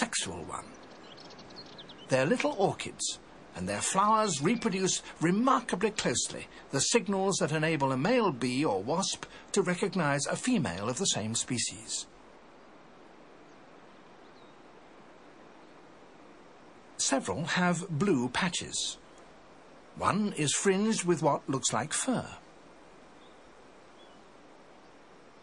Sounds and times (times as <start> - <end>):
Speech: 0.0 - 0.8, 2.1 - 12.1, 17.0 - 19.0, 20.0 - 22.4.